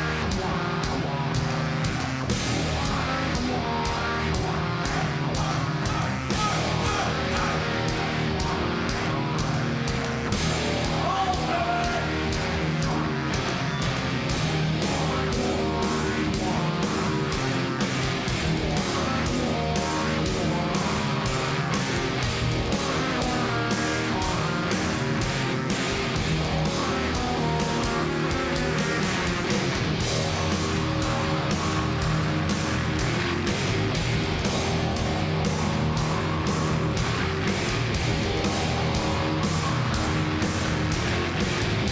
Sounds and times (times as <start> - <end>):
Music: 0.0 - 41.9.